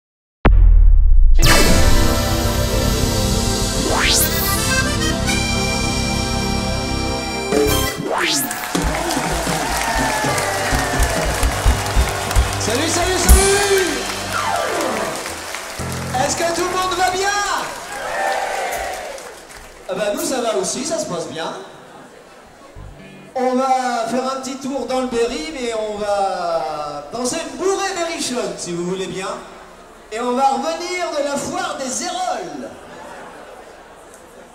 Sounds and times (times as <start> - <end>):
Accordion: 1.4 - 7.9
Traditional music: 1.4 - 17.3
Orchestra: 1.4 - 17.7.